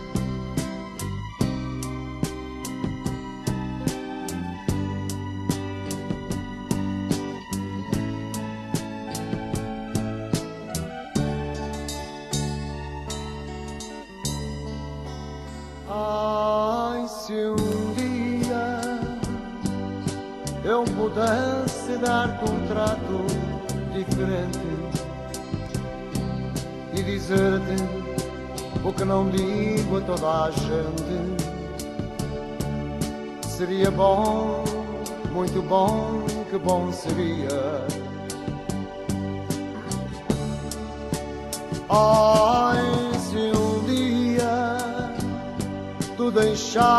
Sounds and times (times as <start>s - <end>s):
Christmas music: 0.0s - 46.9s.